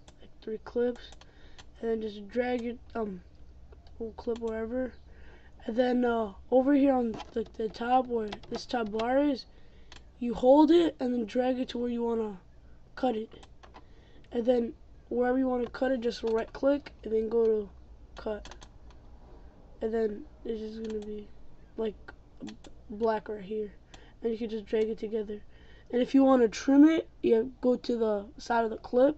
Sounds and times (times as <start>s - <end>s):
Typing: 18.4s - 18.8s.